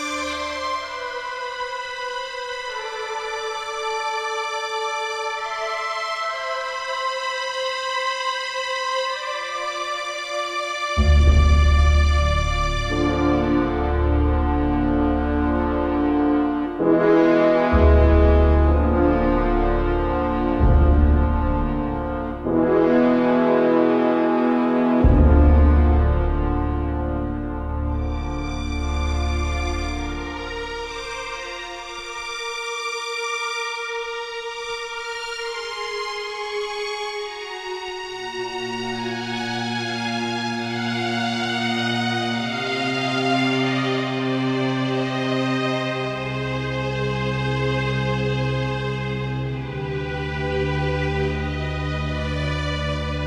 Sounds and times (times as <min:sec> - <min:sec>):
Music: 0:00.0 - 0:53.2.